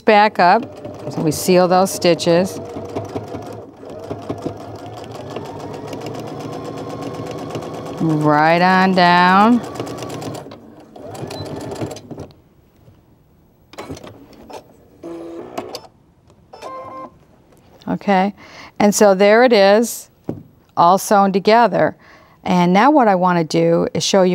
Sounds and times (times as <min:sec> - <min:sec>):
Speech: 0:00.0 - 0:02.6, 0:08.0 - 0:09.6, 0:17.8 - 0:20.1, 0:20.8 - 0:24.3
Sewing machine: 0:00.4 - 0:12.3.